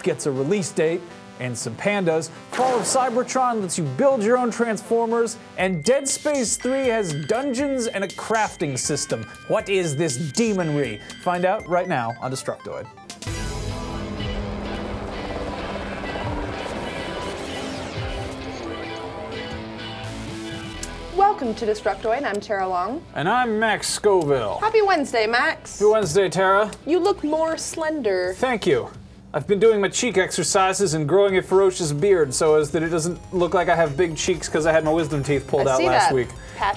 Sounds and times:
Music: 0:00.0 - 0:36.7.

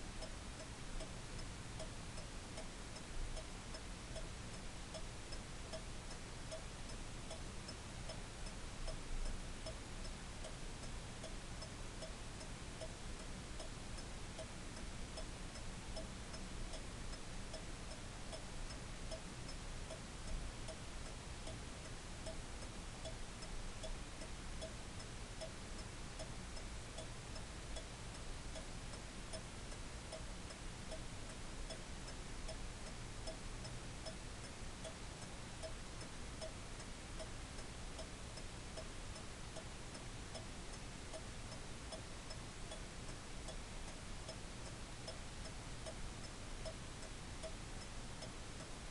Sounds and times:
Tick-tock: 0:00.0 - 0:48.9.

